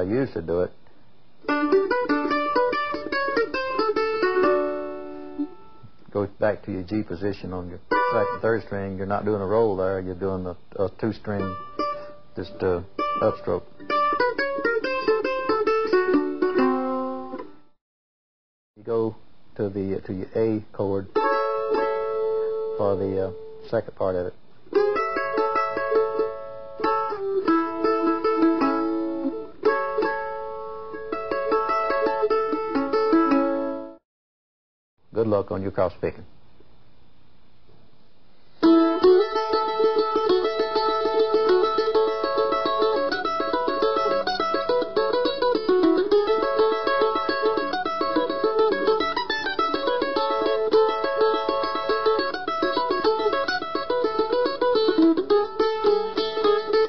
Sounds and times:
Guitar: 0.0 - 17.8, 18.9 - 34.0, 38.6 - 56.8
Mandolin: 1.4 - 17.6, 20.9 - 34.0, 38.6 - 56.8.

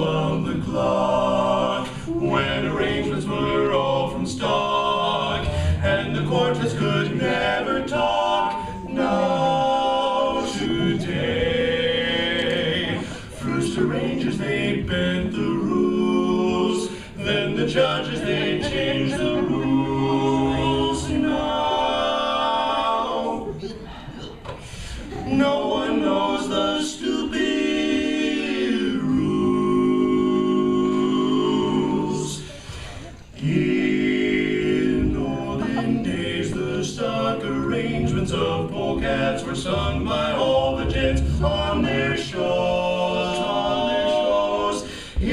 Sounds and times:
Choir: 0.0 - 45.3.

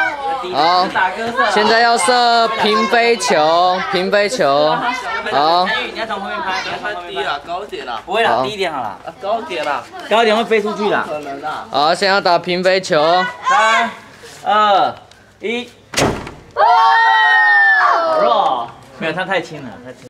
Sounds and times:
Outside, urban or manmade: 0.0 - 20.1.

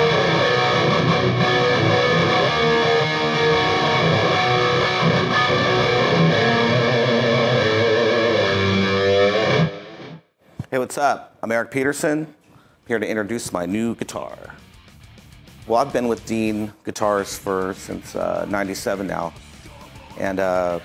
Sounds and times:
Electric guitar: 0.0 - 10.2
Speech: 10.7 - 14.6, 15.7 - 20.8.

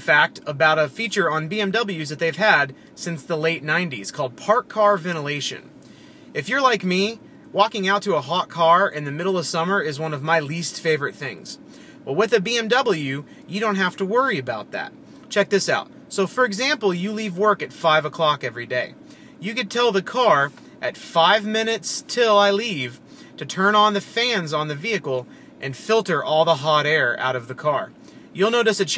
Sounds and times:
Speech: 0.0 - 5.7, 6.4 - 28.9.

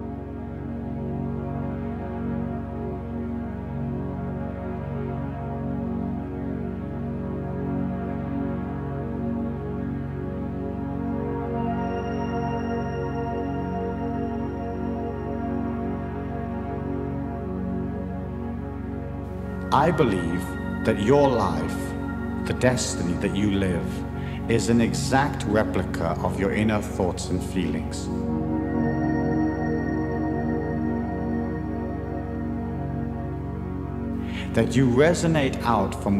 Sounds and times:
New-age music: 0.0 - 36.1
Speech: 19.7 - 21.9, 22.5 - 28.1, 34.4 - 36.1.

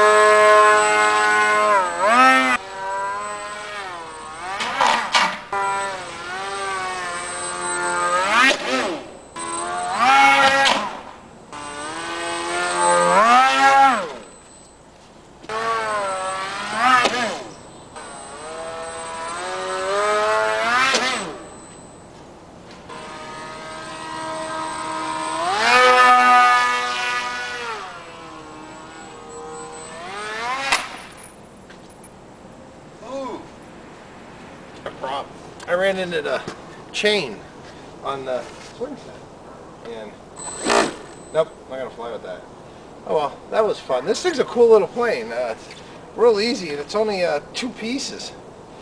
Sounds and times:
Speech: 33.0 - 33.5, 34.9 - 37.4, 38.0 - 39.2, 39.8 - 40.2, 41.4 - 42.5, 43.1 - 48.4.

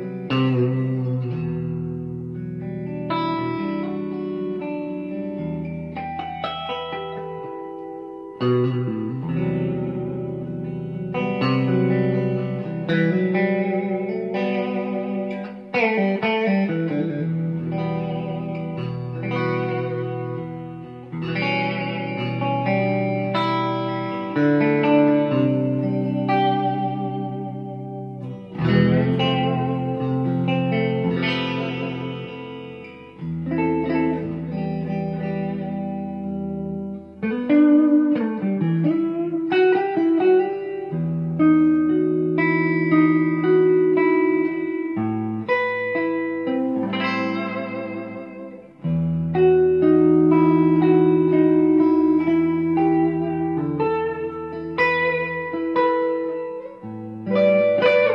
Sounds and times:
Electric guitar: 0.0 - 58.1.

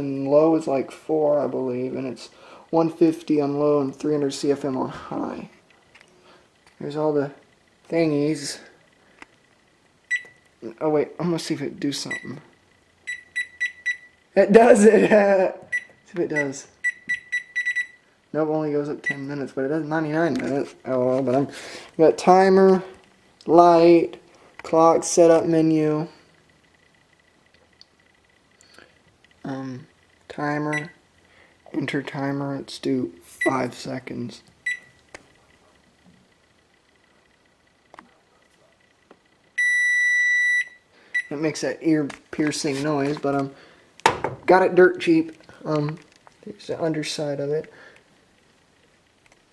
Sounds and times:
Speech: 0.0 - 5.6, 6.8 - 8.8, 10.6 - 12.4, 14.4 - 16.7, 18.3 - 26.2, 29.4 - 31.0, 31.7 - 34.5, 41.3 - 43.6, 44.5 - 47.7.

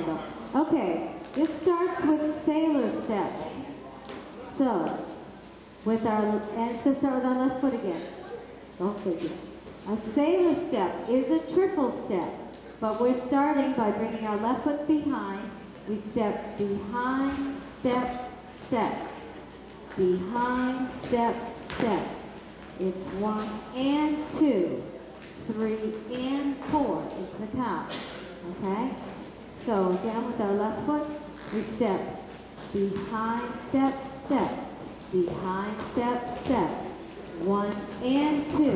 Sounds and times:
Speech: 0.0 - 5.2, 5.8 - 19.2, 19.9 - 22.2, 22.8 - 38.7.

